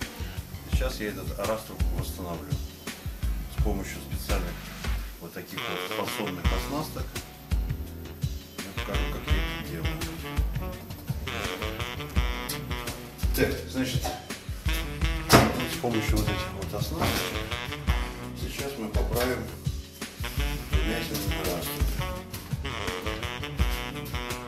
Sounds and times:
Music: 0.0 - 24.4
Speech: 0.7 - 2.7, 3.5 - 4.6, 5.2 - 7.2, 8.6 - 10.0, 13.3 - 14.3, 15.5 - 17.3, 18.4 - 19.6, 20.8 - 22.0.

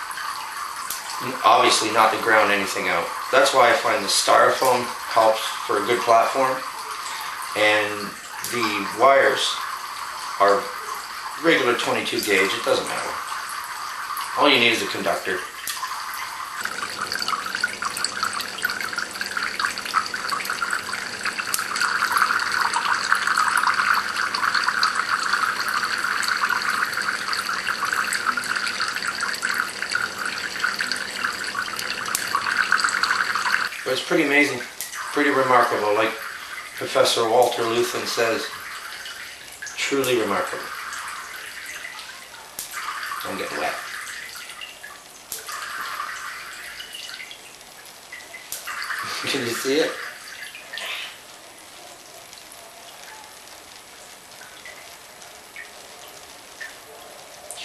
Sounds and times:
Water: 0.0 - 57.6
Water tap, faucet: 0.0 - 57.6.

